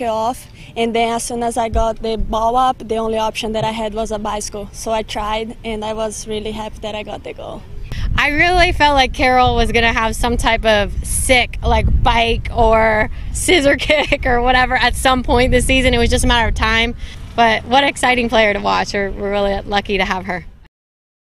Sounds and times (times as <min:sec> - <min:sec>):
Speech: 0:00.0 - 0:20.5.